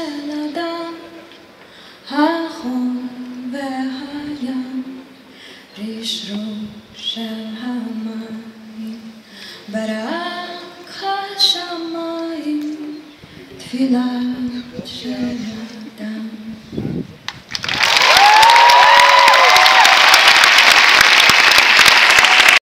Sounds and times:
Speech: 13.4 - 16.0.

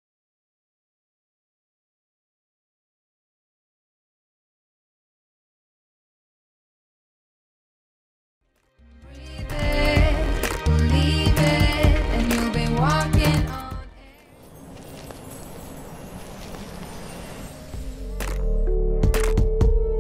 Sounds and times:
Music: 8.4 - 14.3, 17.4 - 20.0.

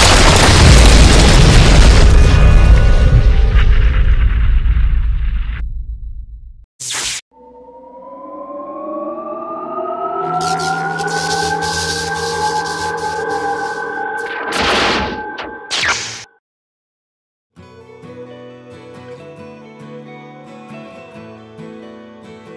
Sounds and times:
Music: 7.3 - 15.7, 17.5 - 22.5.

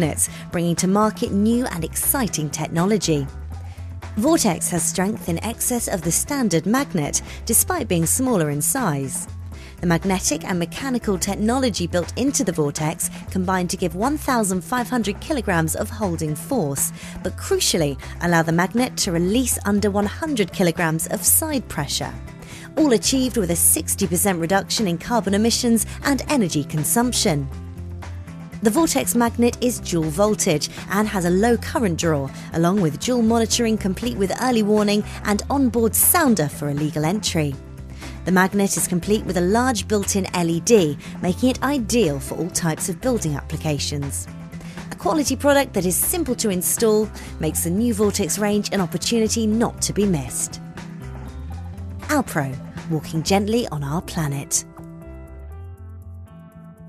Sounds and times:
Speech: 0.0 - 3.3, 4.2 - 22.2, 22.8 - 27.5, 28.6 - 37.6, 38.2 - 44.3, 44.9 - 50.6, 52.1 - 54.7
Music: 0.0 - 56.8.

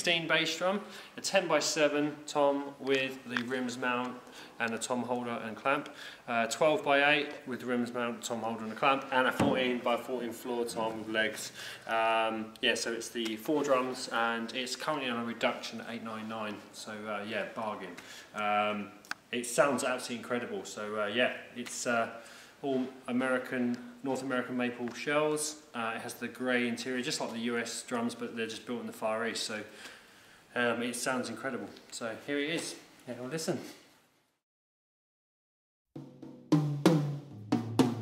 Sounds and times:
Speech: 0.0 - 29.8, 30.5 - 33.8.

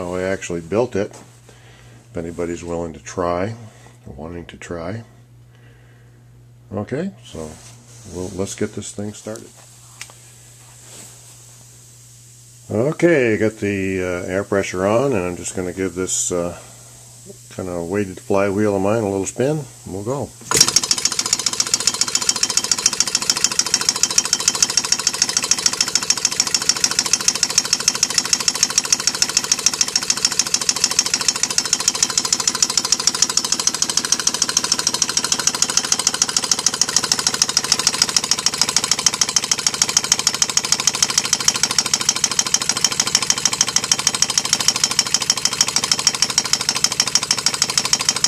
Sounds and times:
Speech: 0.0 - 1.2, 2.1 - 5.1, 6.7 - 9.6, 12.7 - 16.7, 17.3 - 20.4
Engine: 20.5 - 48.2.

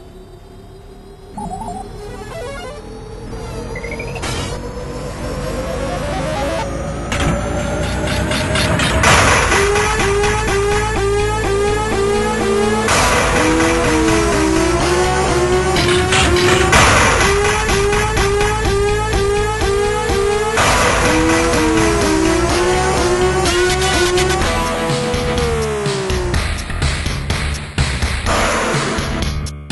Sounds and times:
Music: 1.4 - 29.7.

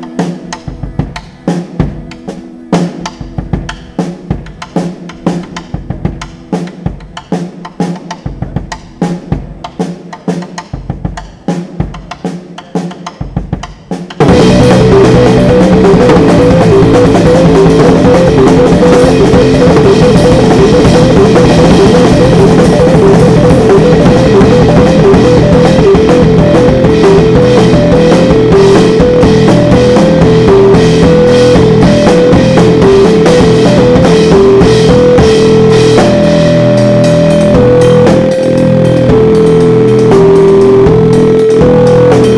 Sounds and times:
Drum kit: 0.0 - 42.3
Bass drum: 14.2 - 42.3.

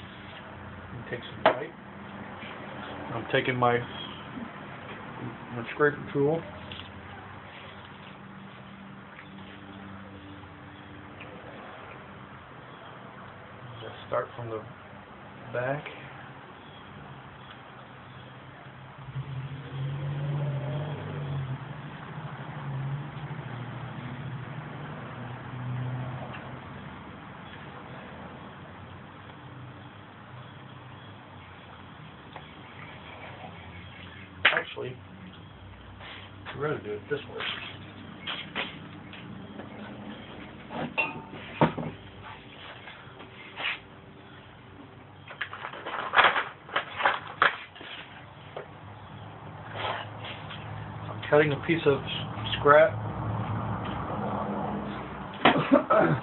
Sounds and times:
Speech: 1.0 - 1.8, 3.1 - 3.9, 5.2 - 6.5, 13.8 - 14.7, 15.5 - 16.1, 34.5 - 35.0, 36.5 - 37.6, 51.2 - 53.0.

